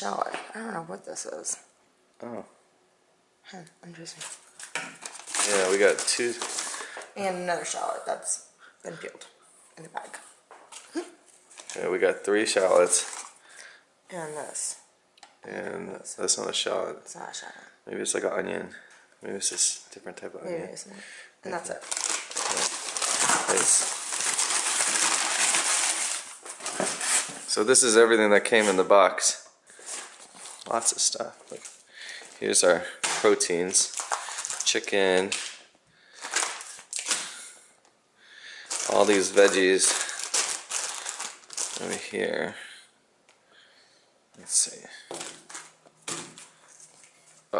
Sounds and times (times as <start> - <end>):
Inside, small room: 0.0 - 47.5.